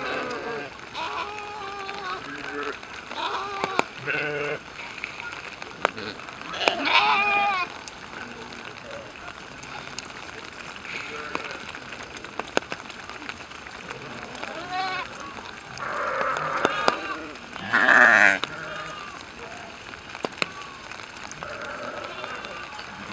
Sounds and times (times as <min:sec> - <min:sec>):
Bleat: 0:00.0 - 0:04.6, 0:06.0 - 0:07.7, 0:14.4 - 0:15.2, 0:15.8 - 0:19.2, 0:21.4 - 0:23.1.